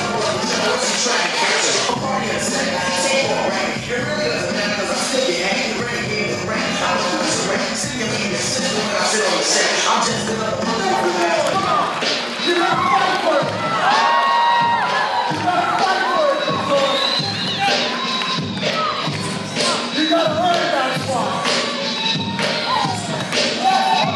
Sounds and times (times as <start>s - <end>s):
Music: 0.0s - 24.1s.